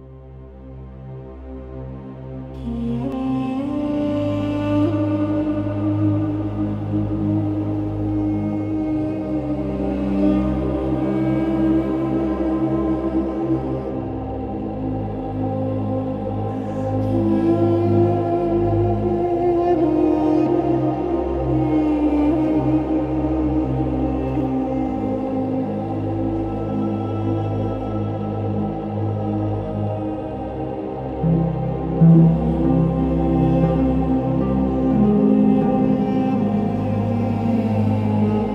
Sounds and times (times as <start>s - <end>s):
Tender music: 0.0s - 38.5s.